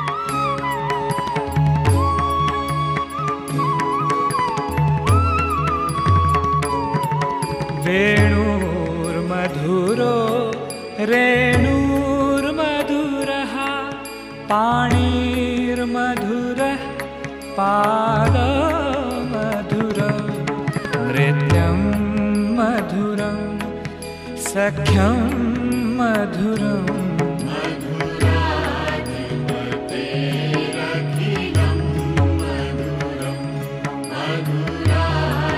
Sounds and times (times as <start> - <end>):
Music: 0.0 - 35.5.